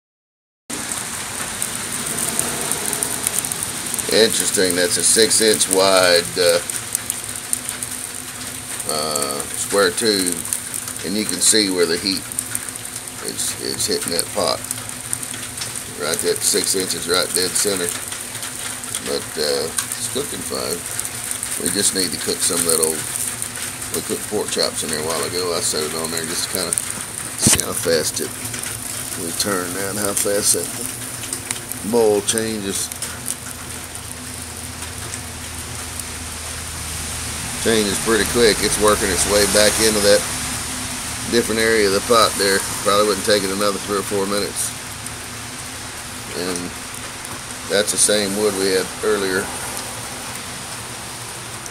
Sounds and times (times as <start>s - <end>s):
Frying (food): 0.7s - 51.7s.